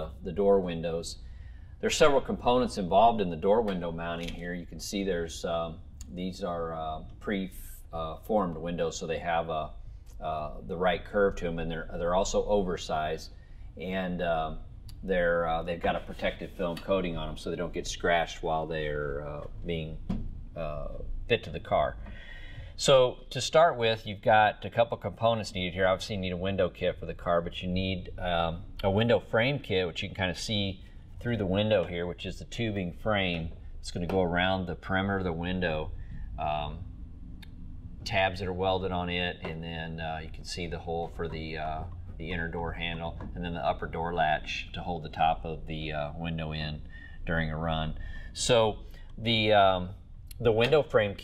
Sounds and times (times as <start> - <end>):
Speech: 0.0 - 1.2, 1.8 - 22.0, 22.8 - 36.8, 38.0 - 51.2.